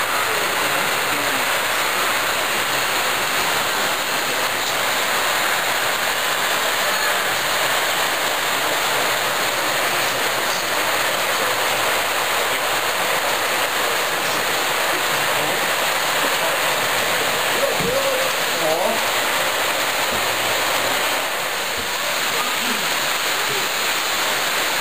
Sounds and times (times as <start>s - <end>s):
Speech: 0.1s - 1.6s, 17.6s - 19.1s, 22.3s - 23.8s.